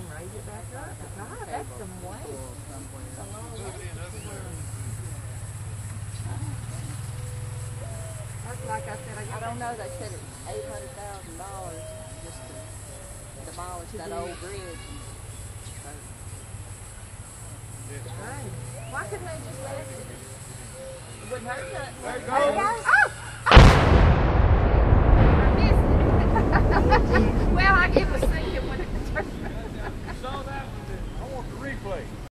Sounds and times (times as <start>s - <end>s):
Burst, pop: 23.5s - 27.2s.